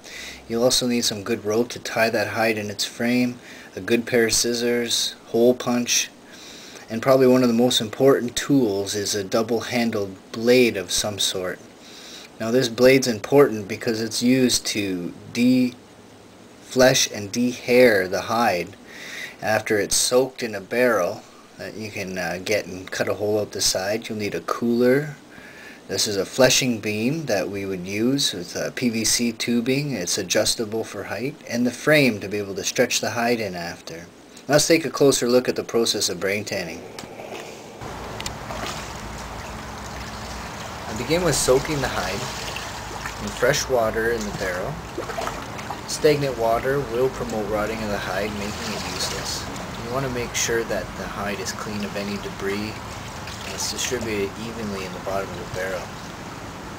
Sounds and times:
Speech: 0.4s - 6.2s, 6.9s - 11.7s, 12.4s - 15.8s, 16.7s - 18.8s, 19.4s - 25.2s, 25.9s - 36.9s, 40.9s - 42.5s, 43.2s - 44.8s, 45.9s - 52.8s, 53.4s - 56.0s.

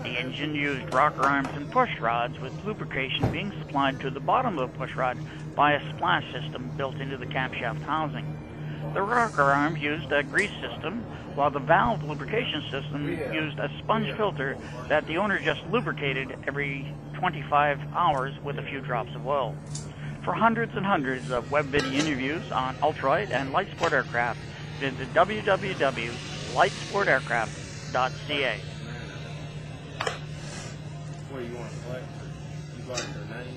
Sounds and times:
Speech: 0.0s - 8.2s, 9.0s - 19.5s, 20.2s - 28.6s.

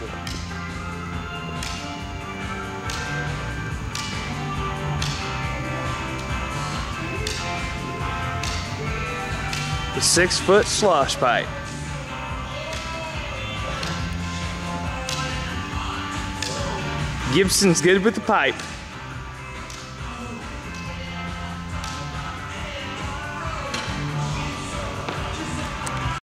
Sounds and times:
Music: 0.0s - 26.2s
Speech: 10.0s - 11.5s, 17.3s - 18.6s.

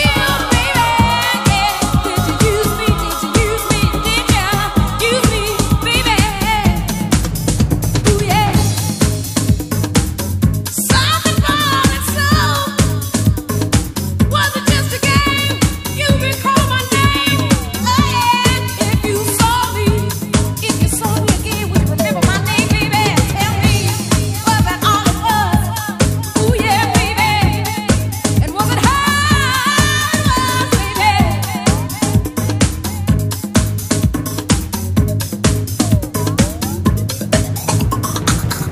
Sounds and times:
Disco: 0.0s - 38.7s.

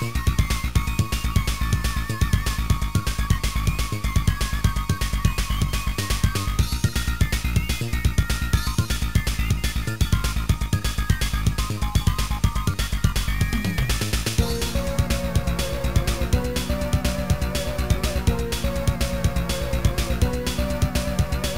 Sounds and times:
Soundtrack music: 0.0s - 21.5s.

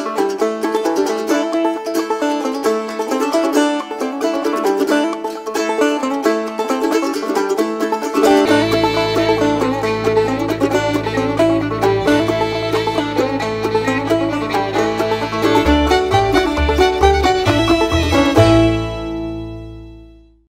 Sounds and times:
Music: 0.0s - 20.5s.

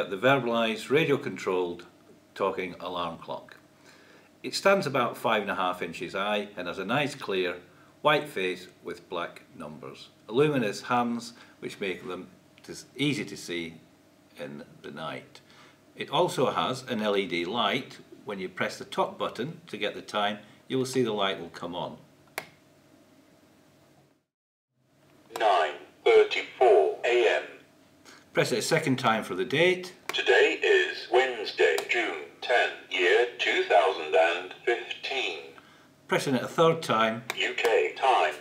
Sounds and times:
Speech: 0.0s - 3.6s, 4.4s - 13.8s, 14.4s - 15.4s, 16.0s - 22.0s, 25.3s - 27.6s, 28.4s - 38.4s.

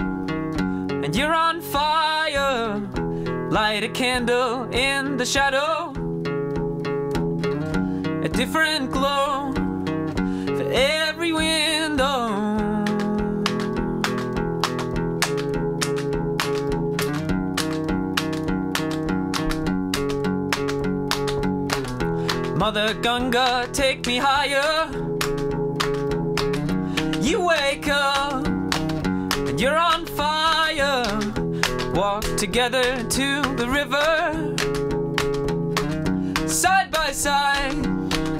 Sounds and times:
Music: 0.0s - 38.3s.

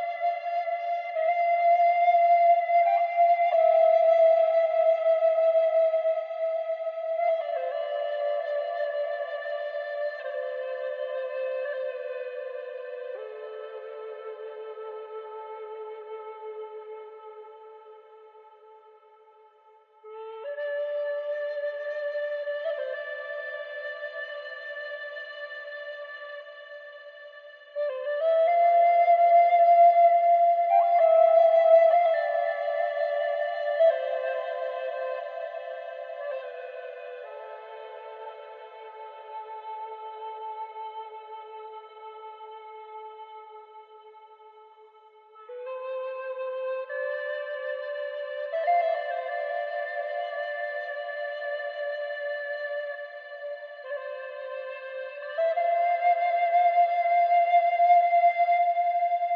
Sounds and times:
Music: 0.0s - 59.3s.

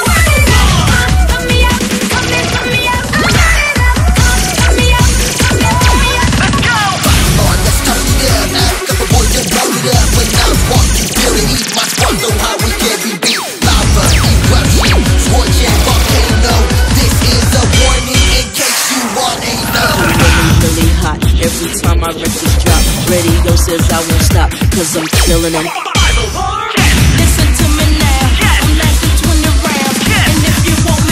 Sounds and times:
Music: 0.0s - 31.1s.

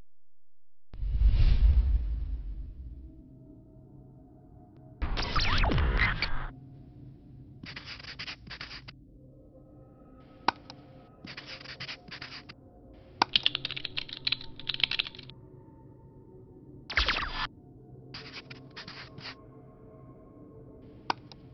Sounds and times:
Sound effect: 1.0s - 3.2s, 5.0s - 6.5s, 16.9s - 17.5s, 18.2s - 19.4s.

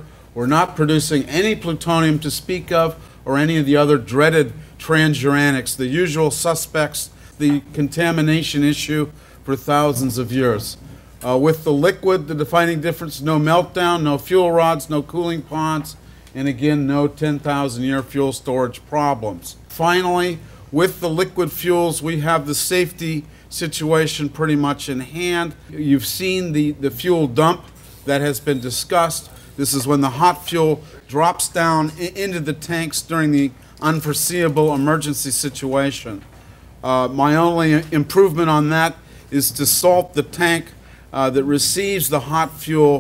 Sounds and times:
Speech: 0.0s - 43.0s.

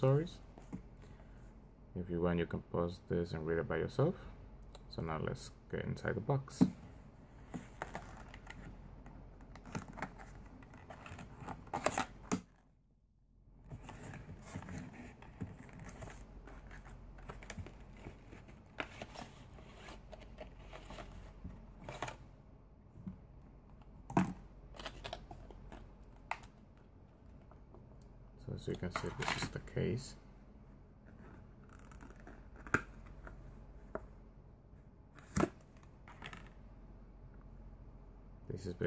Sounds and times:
Inside, small room: 0.0s - 38.8s.

